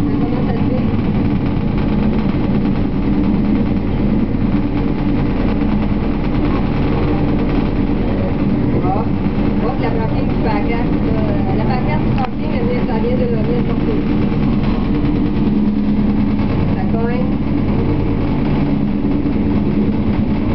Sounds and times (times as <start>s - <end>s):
Speech: 0.0s - 1.0s, 8.0s - 14.1s, 16.8s - 17.4s
Helicopter: 0.0s - 20.5s.